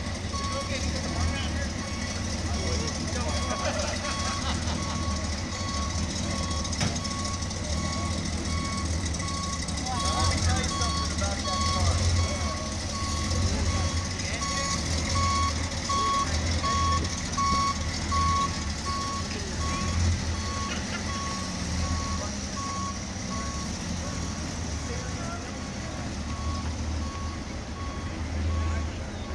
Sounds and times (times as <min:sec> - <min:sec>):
Reversing beeps: 0:00.0 - 0:02.2, 0:02.8 - 0:24.4, 0:26.3 - 0:29.3
Car: 0:00.0 - 0:29.3
Outside, urban or manmade: 0:00.0 - 0:29.3
Speech: 0:00.4 - 0:03.7, 0:09.8 - 0:14.9, 0:24.0 - 0:26.2.